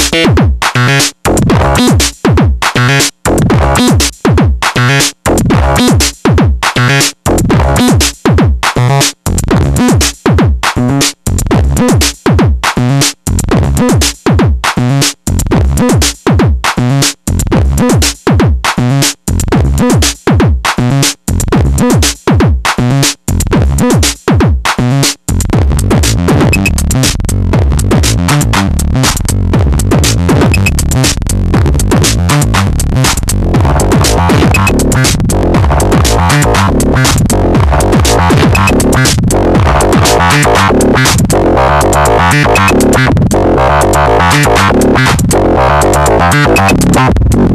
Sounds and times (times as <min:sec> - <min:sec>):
Drum machine: 0:00.0 - 0:47.5
Sampler: 0:25.6 - 0:47.5.